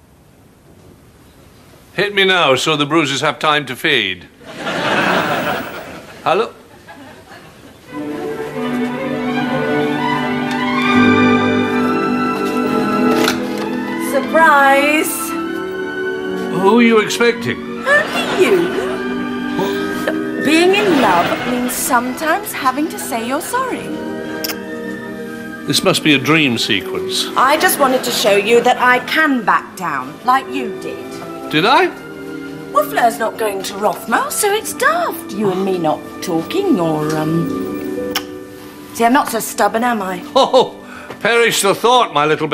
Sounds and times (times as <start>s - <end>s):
Orchestra: 4.5s - 6.4s, 7.8s - 42.5s.